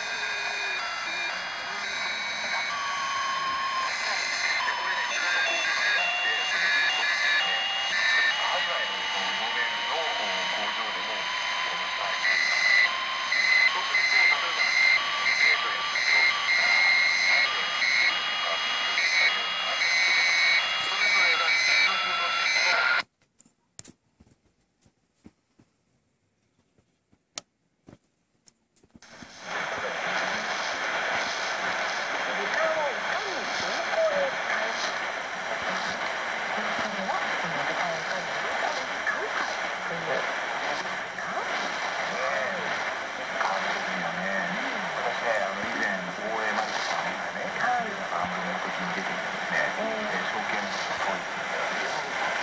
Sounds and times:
Speech: 1.7 - 12.5, 13.6 - 20.2, 20.8 - 23.0, 29.4 - 52.4.

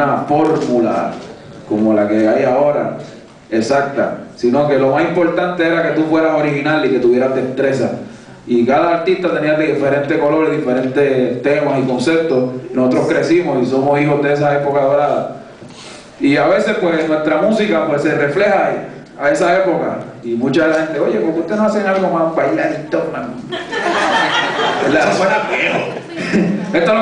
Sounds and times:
Speech: 0.0 - 15.4, 16.2 - 23.4, 24.8 - 27.0.

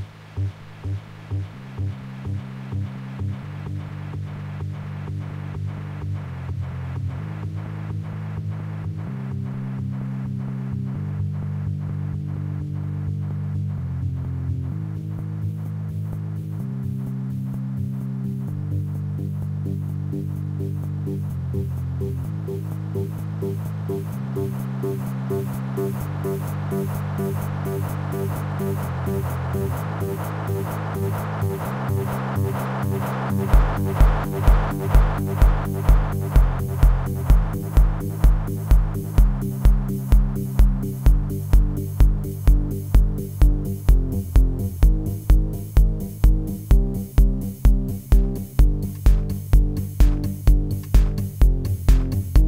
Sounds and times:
Techno: 0.0 - 52.4.

